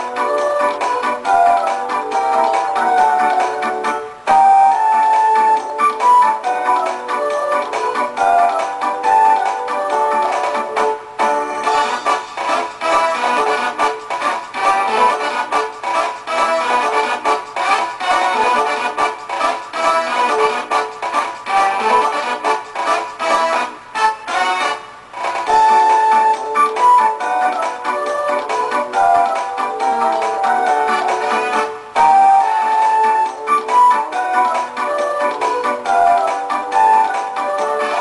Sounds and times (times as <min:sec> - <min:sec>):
Music: 0:00.0 - 0:38.0.